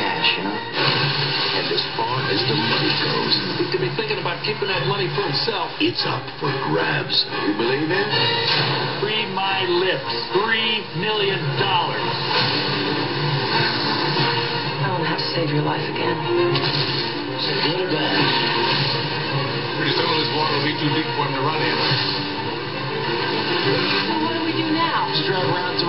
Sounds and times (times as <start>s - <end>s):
Television: 0.0s - 25.8s.